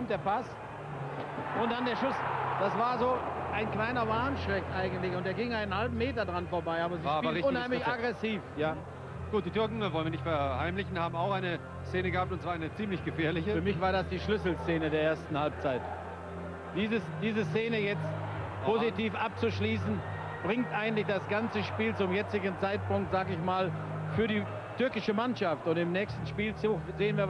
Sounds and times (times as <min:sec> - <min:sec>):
Speech: 0:01.6 - 0:15.8, 0:18.6 - 0:27.3.